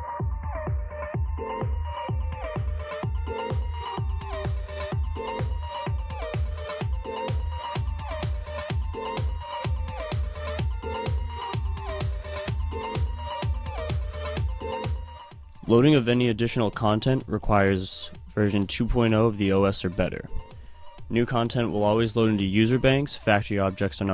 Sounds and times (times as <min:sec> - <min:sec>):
Music: 0:00.0 - 0:24.1
Speech: 0:15.6 - 0:20.4, 0:21.1 - 0:24.1.